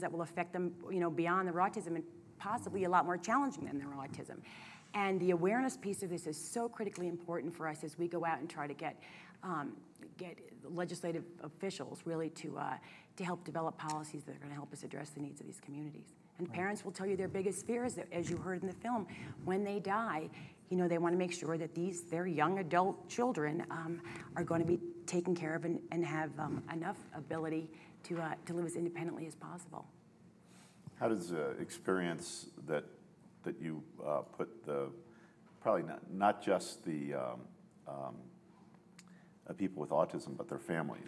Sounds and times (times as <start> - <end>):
Inside, small room: 0.0 - 41.0
Speech: 0.1 - 4.3, 9.6 - 29.8, 31.0 - 32.8, 39.5 - 41.0.